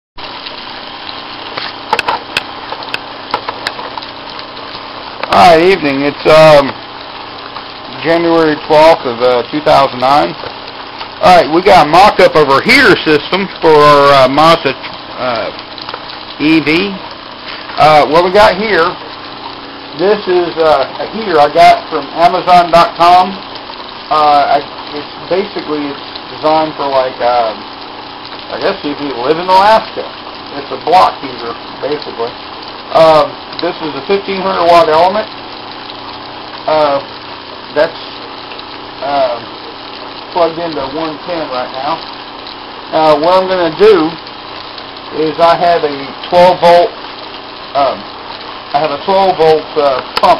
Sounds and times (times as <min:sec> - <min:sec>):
Speech: 0:05.2 - 0:06.8, 0:07.9 - 0:10.4, 0:11.2 - 0:15.6, 0:16.4 - 0:17.0, 0:17.8 - 0:19.0, 0:20.0 - 0:23.4, 0:24.1 - 0:27.6, 0:28.5 - 0:35.3, 0:36.7 - 0:37.1, 0:37.7 - 0:38.2, 0:39.0 - 0:39.5, 0:40.4 - 0:42.0, 0:42.9 - 0:44.2, 0:45.1 - 0:47.0, 0:47.7 - 0:48.1, 0:48.7 - 0:50.3.